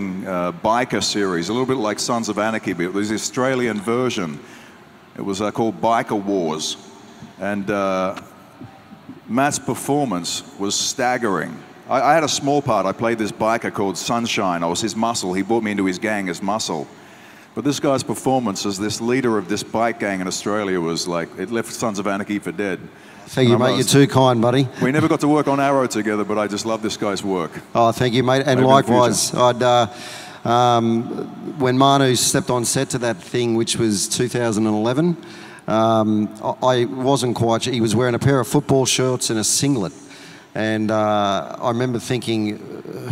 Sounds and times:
Speech: 0.0 - 4.5, 5.2 - 16.9, 17.6 - 40.0, 40.6 - 43.1.

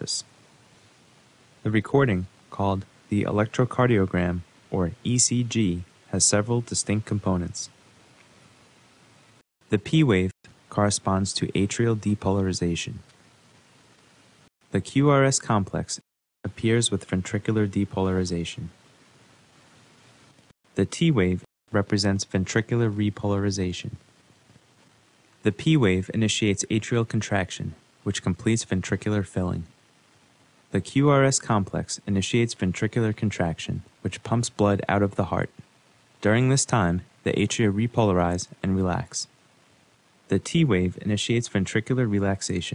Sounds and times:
Speech: 0.0 - 0.3, 1.6 - 7.8, 9.7 - 13.1, 14.7 - 18.8, 20.8 - 24.0, 25.4 - 29.8, 30.7 - 39.4, 40.3 - 42.7.

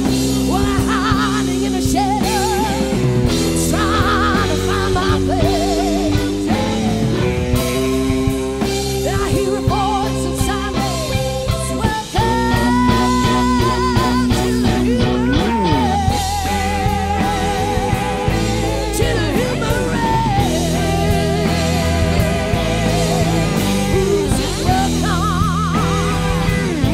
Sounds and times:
Grunge: 0.0 - 26.9
Guitar: 0.0 - 26.9.

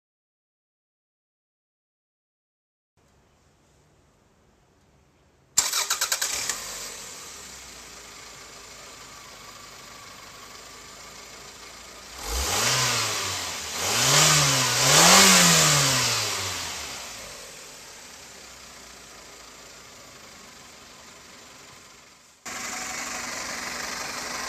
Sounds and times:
Silence: 3.0 - 5.6, 17.3 - 24.4
Car: 5.6 - 24.4.

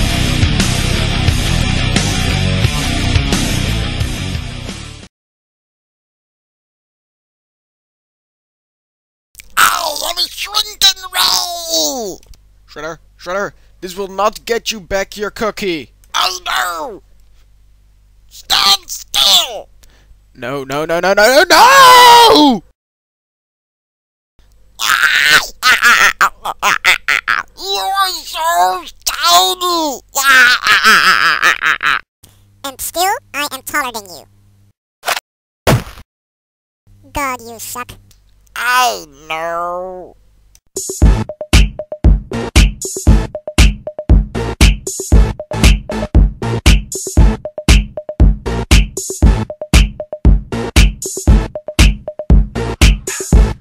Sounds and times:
Speech: 9.6 - 17.0, 18.3 - 19.7, 20.4 - 21.6, 27.6 - 30.3, 32.6 - 34.3, 37.0 - 38.0, 38.6 - 40.2.

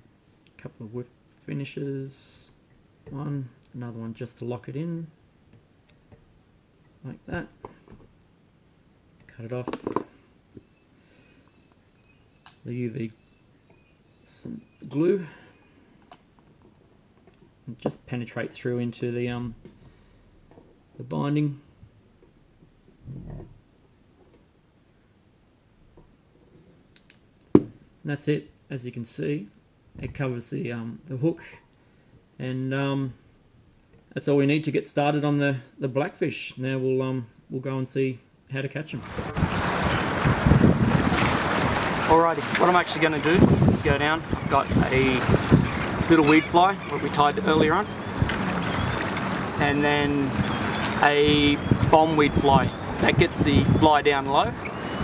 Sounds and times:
Speech: 0.6 - 5.2, 7.0 - 7.6, 9.3 - 9.8, 12.6 - 13.2, 14.3 - 15.4, 17.7 - 19.6, 21.0 - 21.6, 28.1 - 31.4, 32.4 - 33.2, 34.2 - 39.1, 42.1 - 45.3, 46.1 - 47.9, 49.6 - 50.4, 51.0 - 54.6.

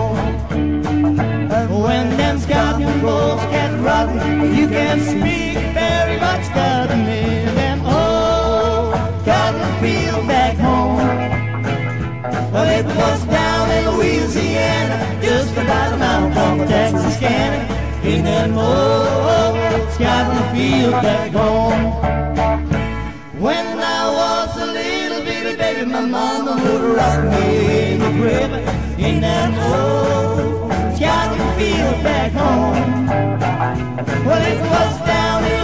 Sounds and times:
Music: 0.0 - 35.6.

